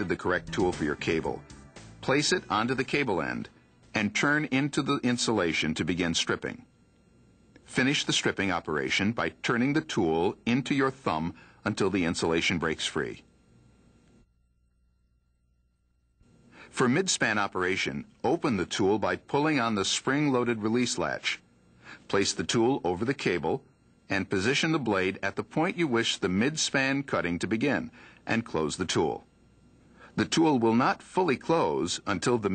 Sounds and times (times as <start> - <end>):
Speech: 0.0 - 1.4, 2.0 - 6.7, 7.7 - 13.3, 16.7 - 21.5, 22.1 - 29.3, 30.2 - 32.5.